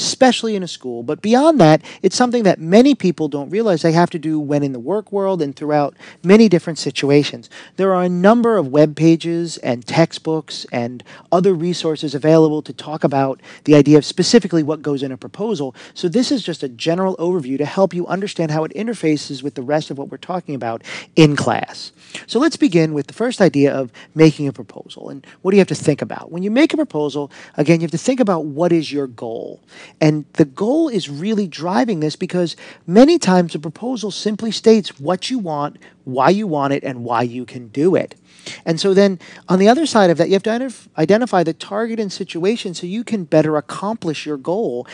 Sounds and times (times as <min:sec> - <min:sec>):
Speech: 0:00.0 - 0:44.9.